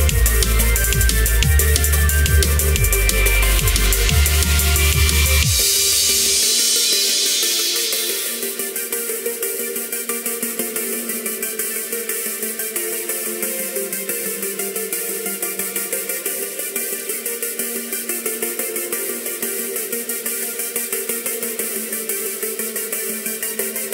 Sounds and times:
Bass drum: 0.0 - 7.1.

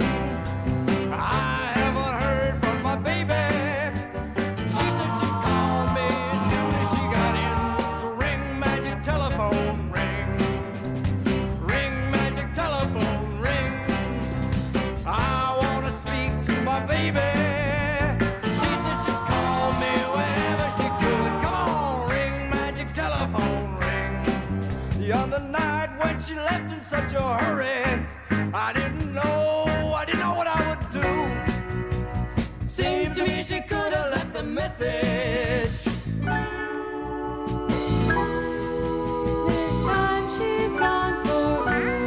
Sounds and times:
Music: 0.0 - 42.0.

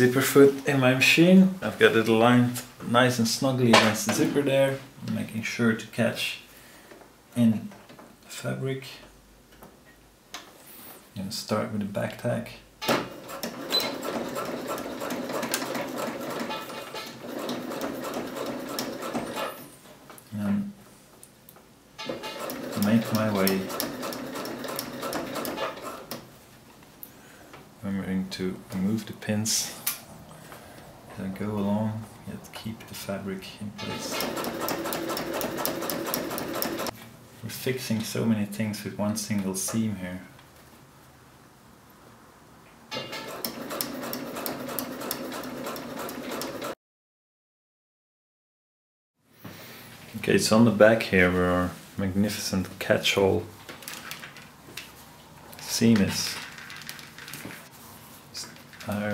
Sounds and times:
Speech: 0.0 - 6.5, 7.3 - 9.1, 11.2 - 12.7, 20.3 - 20.8, 22.8 - 23.7, 27.8 - 29.9, 31.1 - 34.2, 37.4 - 40.4, 50.1 - 53.6, 55.6 - 56.5, 58.4 - 59.1.

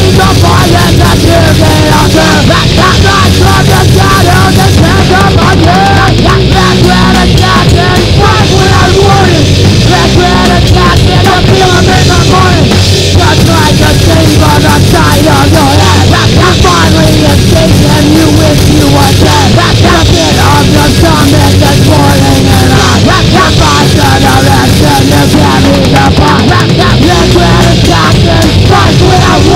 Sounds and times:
Music: 0.0 - 29.5
Speech: 0.0 - 29.5.

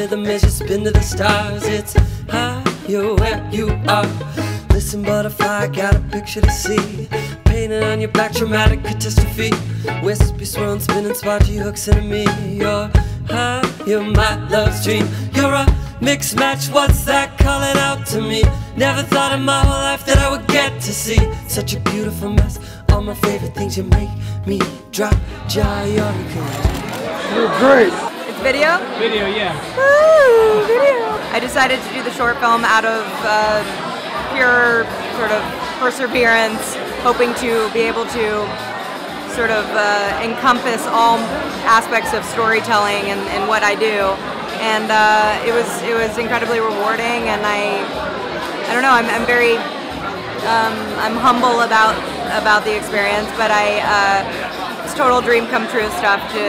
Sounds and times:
Music: 0.0 - 28.1, 29.8 - 56.4.

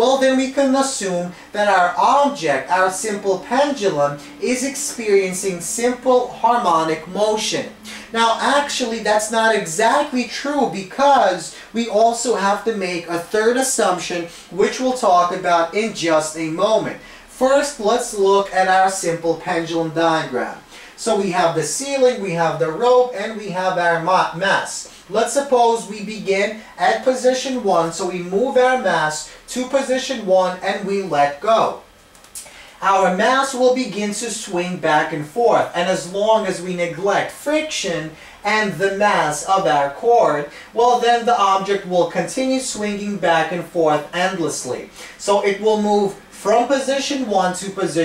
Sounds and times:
Speech: 0.0 - 48.0.

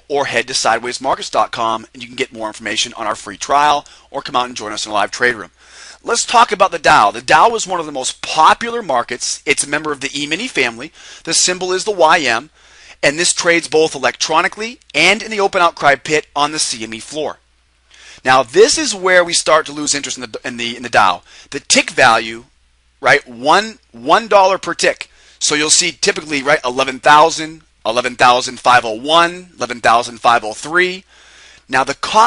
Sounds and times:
Speech: 0.0 - 17.4, 18.2 - 31.1, 31.7 - 32.2.

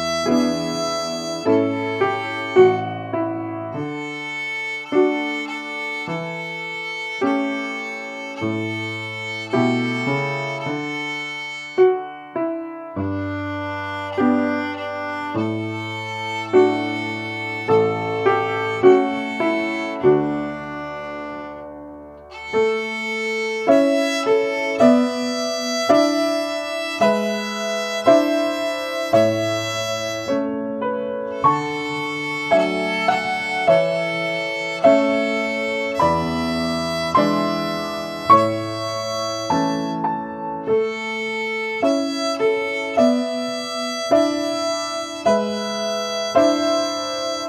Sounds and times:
Classical music: 0.0 - 47.4
Violin, fiddle: 0.0 - 47.4.

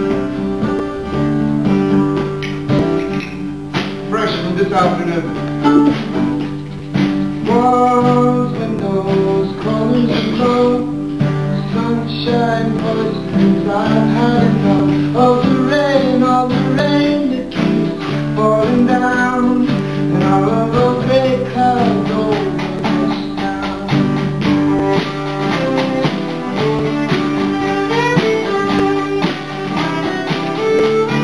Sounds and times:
Vocal music: 4.1 - 28.6.

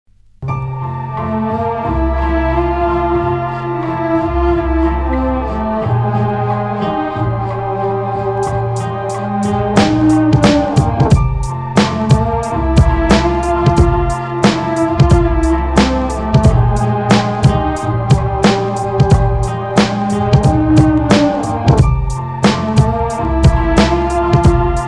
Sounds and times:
Electronic music: 0.4 - 24.8.

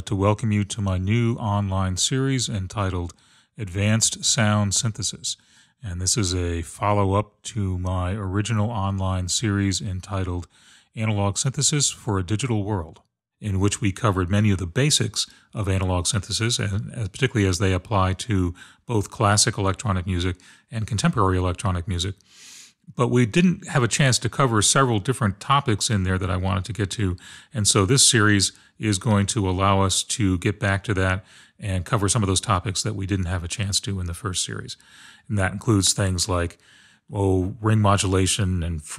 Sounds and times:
Speech: 0.0 - 22.2, 22.9 - 38.9.

